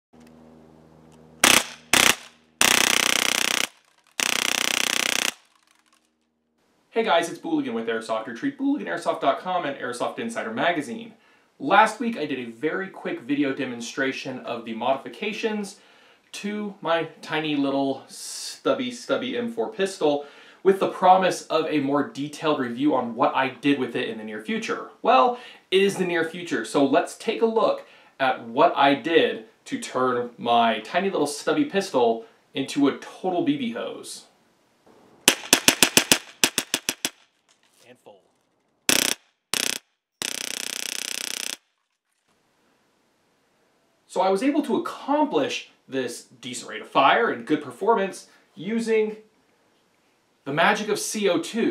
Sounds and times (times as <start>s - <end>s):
Cap gun: 1.4s - 5.9s, 35.3s - 37.2s, 38.9s - 41.6s.